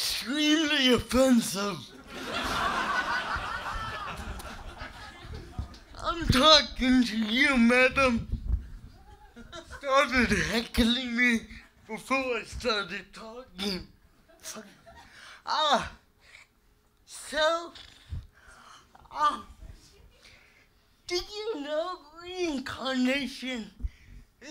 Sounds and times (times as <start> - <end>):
Speech: 0.0 - 1.9, 6.0 - 8.3, 9.8 - 14.8, 15.5 - 16.0, 17.1 - 17.9, 19.0 - 20.0, 21.1 - 23.8.